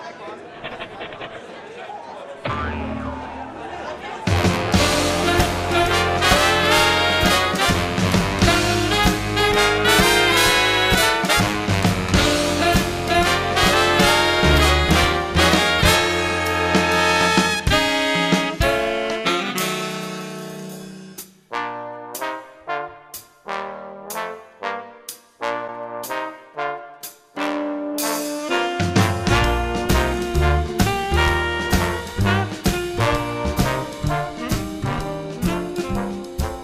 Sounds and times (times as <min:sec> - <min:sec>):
Music: 0:02.8 - 0:36.6.